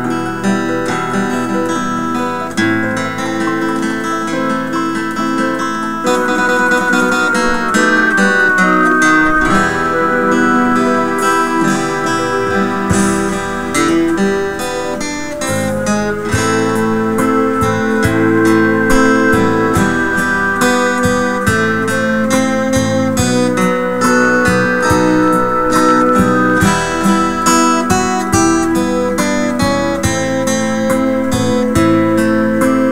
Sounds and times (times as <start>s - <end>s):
Folk music: 0.8s - 32.9s.